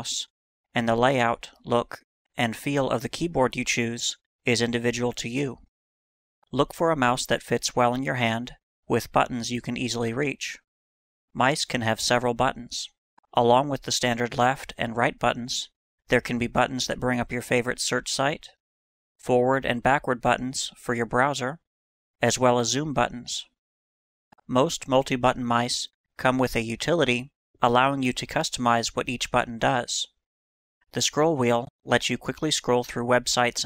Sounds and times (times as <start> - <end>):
Speech: 0.0 - 5.7, 6.5 - 10.6, 11.4 - 18.6, 19.2 - 21.6, 22.2 - 23.6, 24.4 - 30.2, 30.9 - 33.6.